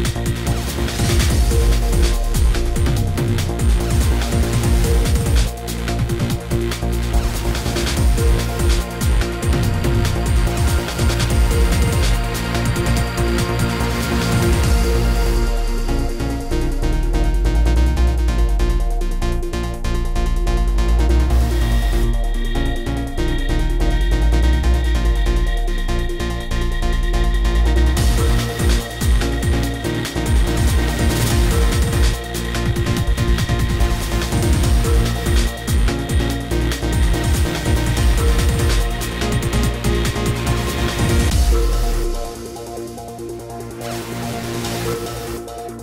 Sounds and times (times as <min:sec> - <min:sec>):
Music: 0:00.0 - 0:45.8.